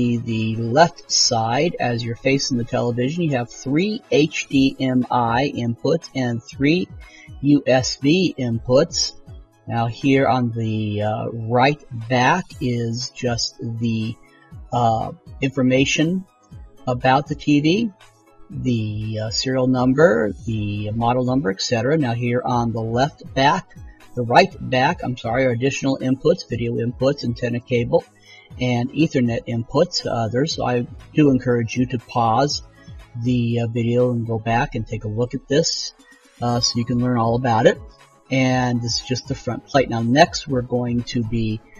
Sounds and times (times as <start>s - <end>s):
Speech: 0.0s - 16.2s, 16.9s - 17.9s, 18.5s - 32.6s, 33.2s - 41.7s
Music: 0.0s - 41.7s.